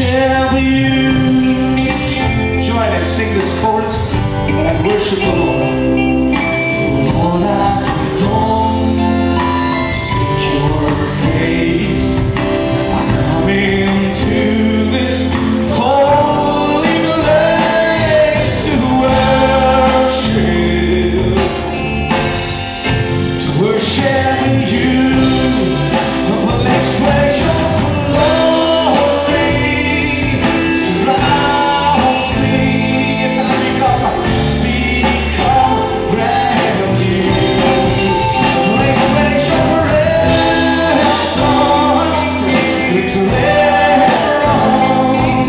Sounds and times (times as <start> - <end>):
Music: 0.0 - 45.4.